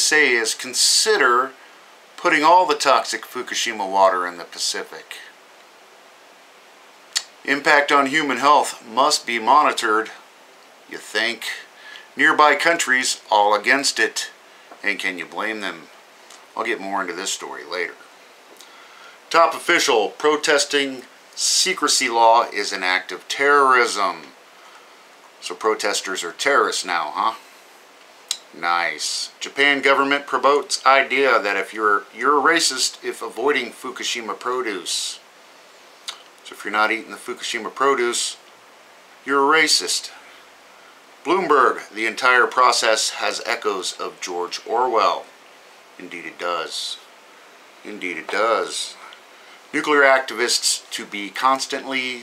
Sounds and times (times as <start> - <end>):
Speech: 0.0 - 1.6, 2.2 - 5.4, 7.2 - 10.2, 10.9 - 15.9, 16.6 - 18.1, 19.3 - 24.4, 25.4 - 27.4, 28.3 - 35.2, 36.1 - 38.4, 39.2 - 40.2, 41.2 - 45.3, 46.0 - 47.1, 47.8 - 49.1, 49.7 - 52.2.